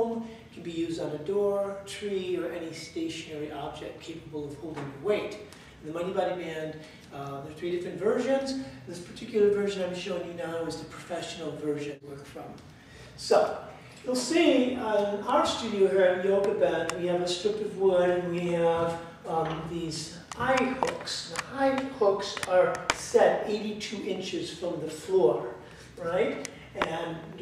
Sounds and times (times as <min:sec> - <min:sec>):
Speech: 0:00.0 - 0:12.6, 0:13.2 - 0:27.4.